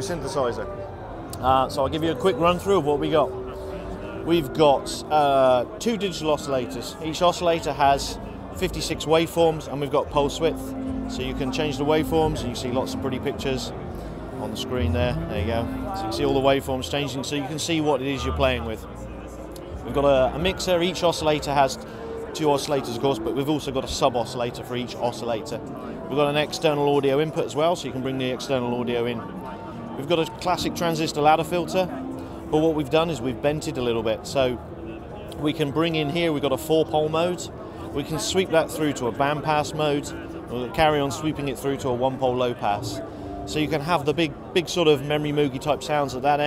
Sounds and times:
Speech: 0.0s - 0.7s, 1.4s - 13.8s, 14.4s - 19.0s, 19.7s - 46.4s
Music: 0.0s - 46.4s.

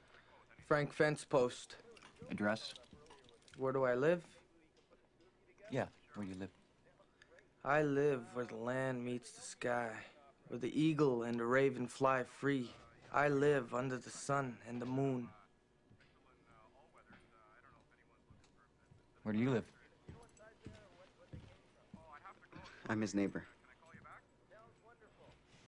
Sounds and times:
Speech: 0.2s - 25.6s.

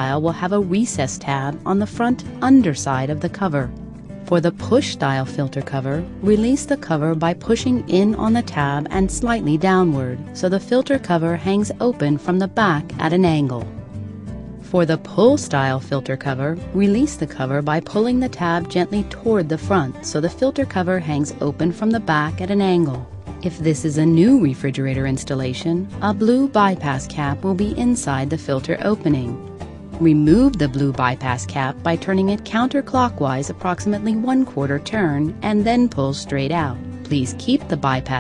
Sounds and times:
Speech: 0.0s - 3.7s, 4.3s - 13.7s, 14.7s - 29.4s, 30.0s - 38.2s
Music: 0.0s - 38.2s.

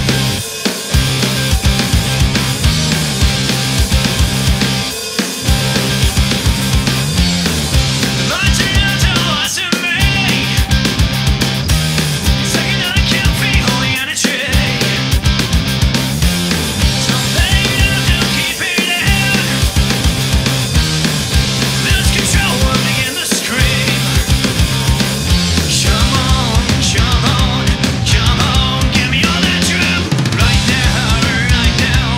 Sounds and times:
Music: 0.0s - 32.1s.

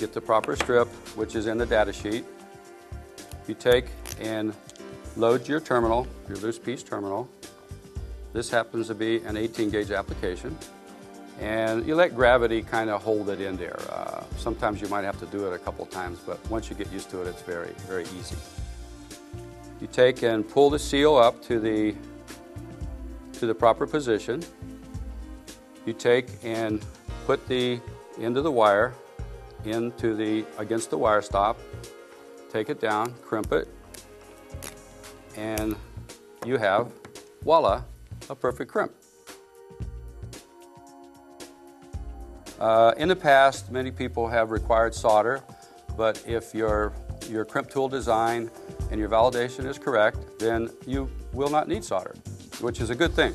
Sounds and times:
Speech: 0.0s - 2.2s, 3.5s - 4.6s, 5.2s - 7.3s, 8.4s - 10.6s, 11.4s - 18.4s, 19.8s - 22.0s, 23.4s - 24.5s, 25.9s - 29.0s, 29.6s - 31.6s, 32.5s - 33.7s, 35.4s - 35.8s, 36.4s - 39.0s, 42.6s - 45.4s, 46.0s - 53.3s
Music: 0.0s - 53.3s.

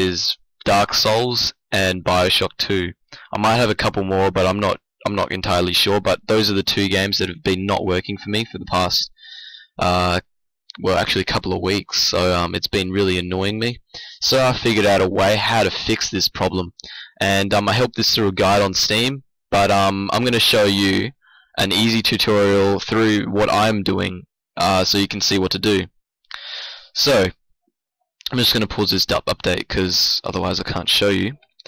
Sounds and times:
Speech: 0.0s - 27.4s, 28.2s - 31.5s.

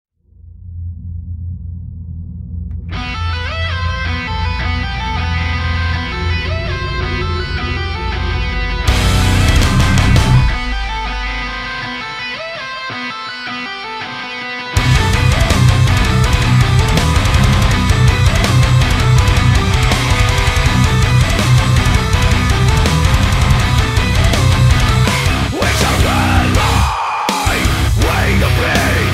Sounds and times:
Music: 2.7s - 29.1s.

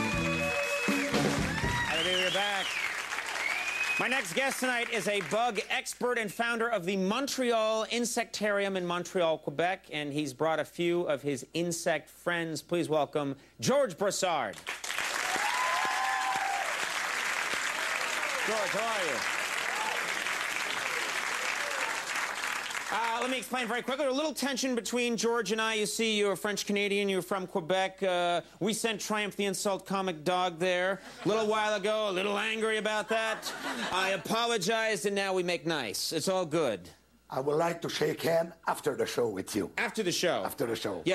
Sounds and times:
Speech: 4.0s - 14.5s, 22.9s - 41.1s.

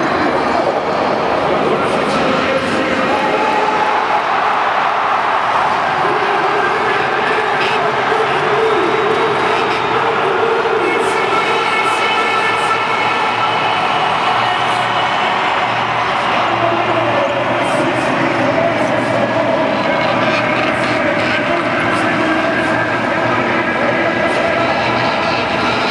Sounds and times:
Speech: 0.0s - 4.6s, 5.6s - 15.5s, 16.1s - 25.9s.

